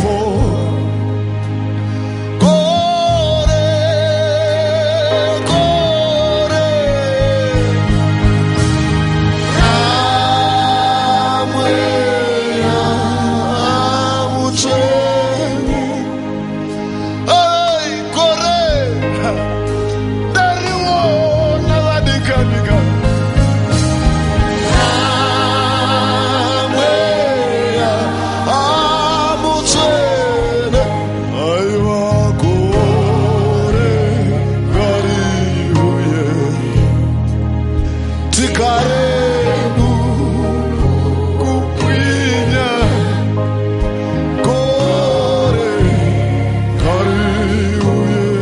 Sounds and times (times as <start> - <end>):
Music: 0.0 - 48.4.